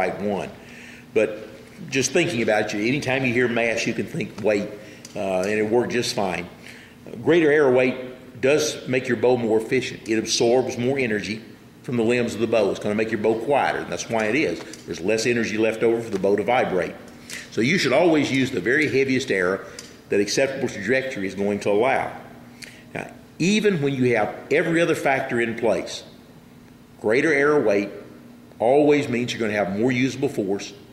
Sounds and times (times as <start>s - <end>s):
Speech: 0.0s - 0.6s, 1.2s - 22.2s, 22.9s - 26.1s, 27.0s - 28.0s, 28.6s - 30.8s.